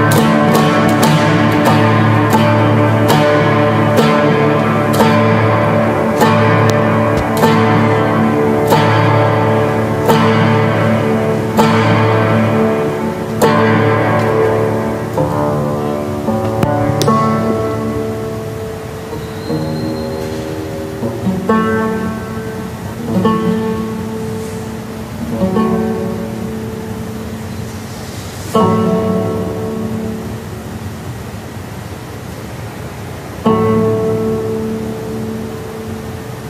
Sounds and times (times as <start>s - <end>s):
Double bass: 0.0s - 30.1s
Cello: 0.0s - 31.0s.